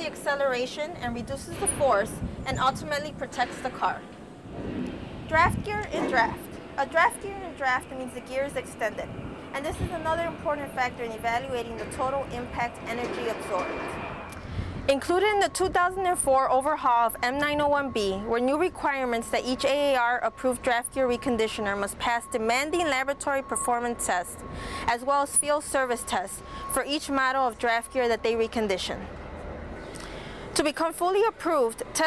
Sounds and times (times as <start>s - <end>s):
Speech: 0.0s - 4.0s, 5.3s - 13.7s, 14.9s - 29.1s, 30.6s - 32.0s.